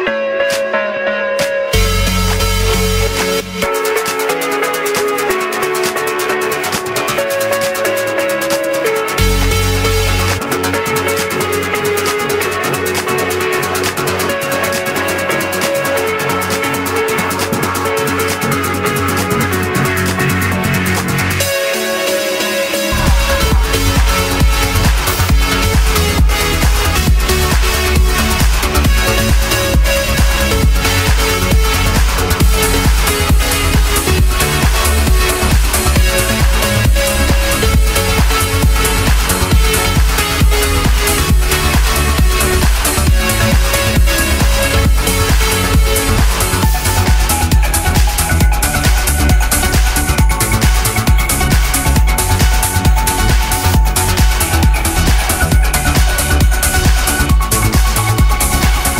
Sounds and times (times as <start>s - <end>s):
Electronic music: 0.0s - 58.9s.